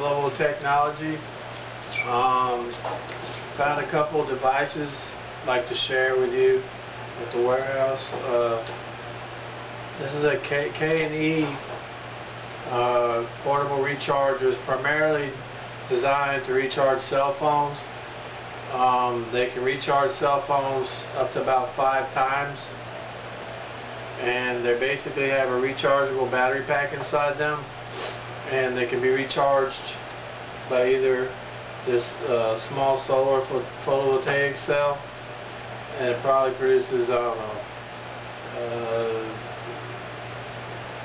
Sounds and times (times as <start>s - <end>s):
Speech: 0.0s - 1.3s, 2.0s - 2.9s, 3.6s - 8.8s, 10.0s - 11.7s, 12.7s - 18.0s, 18.7s - 22.8s, 24.2s - 27.7s, 28.4s - 30.1s, 30.7s - 35.1s, 35.9s - 37.7s, 38.5s - 39.8s.